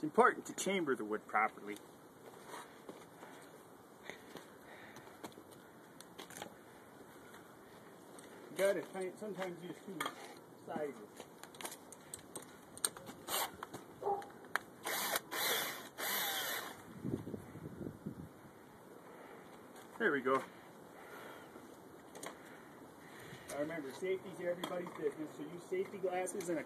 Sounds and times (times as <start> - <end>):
Speech: 0.0 - 1.8, 8.5 - 11.2, 20.0 - 20.5, 23.5 - 26.6.